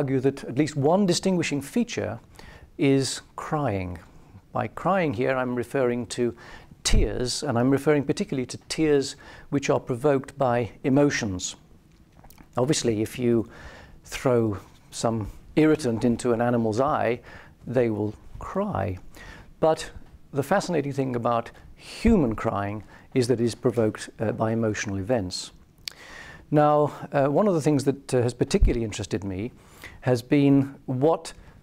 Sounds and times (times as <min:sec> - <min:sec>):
Speech: 0:00.0 - 0:02.2, 0:02.8 - 0:11.6, 0:12.6 - 0:25.6, 0:26.5 - 0:31.4.